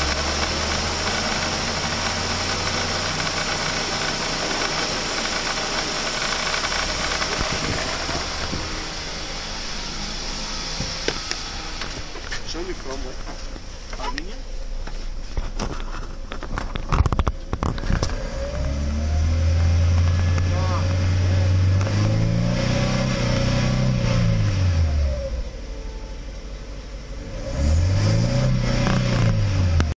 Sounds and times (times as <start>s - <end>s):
Accelerating, revving, vroom: 0.0s - 8.3s, 18.0s - 25.3s, 27.2s - 29.9s
Car: 0.0s - 29.9s
Medium engine (mid frequency): 0.0s - 29.9s.